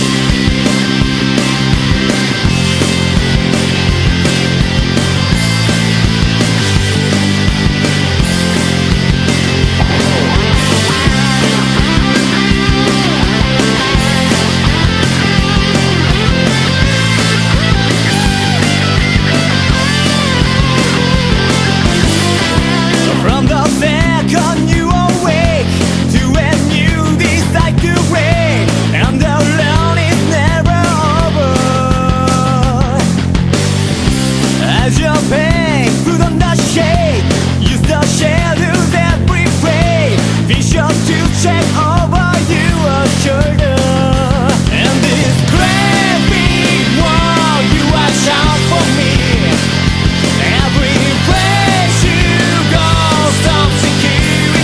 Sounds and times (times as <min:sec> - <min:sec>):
Music: 0:00.0 - 0:54.6.